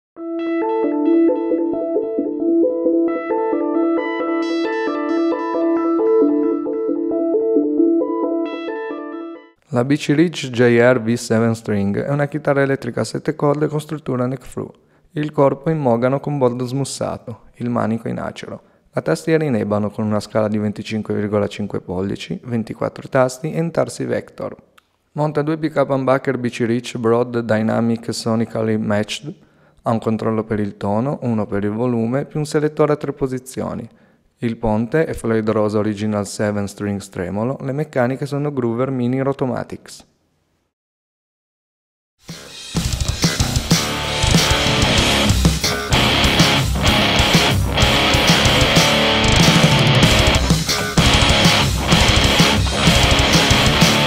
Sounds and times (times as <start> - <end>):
Musical instrument: 0.2 - 9.6, 42.3 - 54.0
Speech: 9.7 - 40.1.